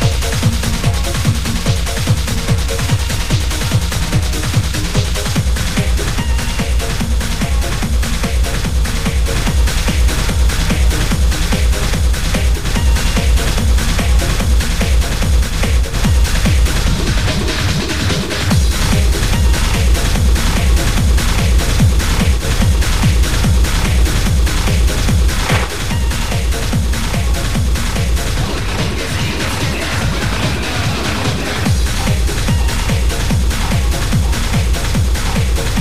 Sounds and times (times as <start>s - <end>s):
Techno: 0.0s - 35.8s.